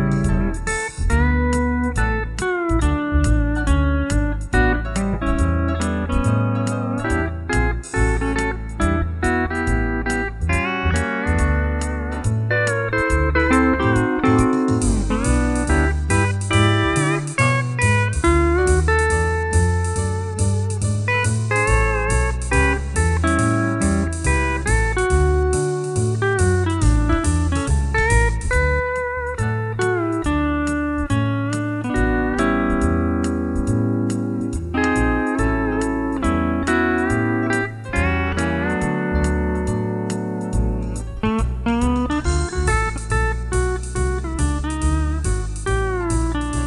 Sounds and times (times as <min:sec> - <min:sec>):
Guitar: 0:00.0 - 0:46.6.